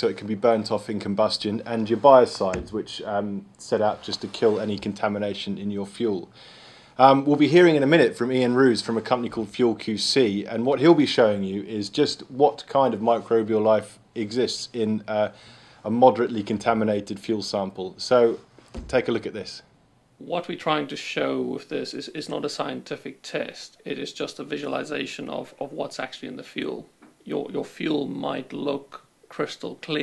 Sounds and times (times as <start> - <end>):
Speech: 0.0 - 6.4, 7.0 - 30.0.